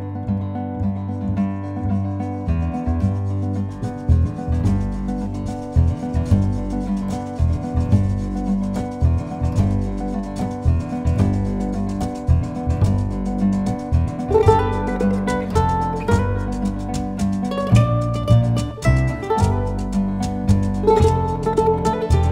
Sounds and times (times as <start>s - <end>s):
Percussion: 1.4s - 22.3s.